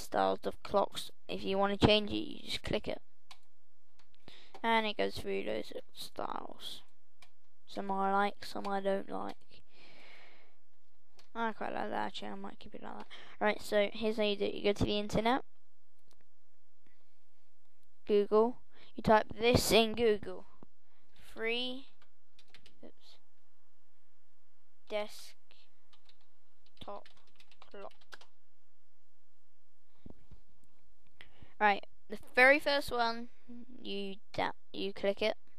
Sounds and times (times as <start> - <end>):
Speech: 0.0 - 3.0, 4.6 - 6.9, 7.7 - 9.4, 11.4 - 15.4, 18.1 - 20.5, 21.2 - 21.9, 24.9 - 25.4, 26.8 - 27.1, 27.7 - 27.9, 31.6 - 35.4.